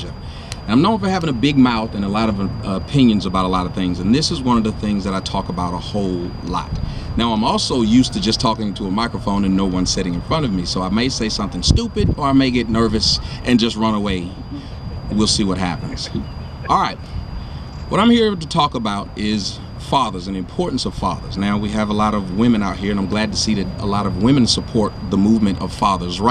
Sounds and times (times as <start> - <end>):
Male speech, man speaking: 0.0 - 14.5, 15.1 - 17.0, 17.9 - 26.3
Narration, monologue: 0.0 - 26.3.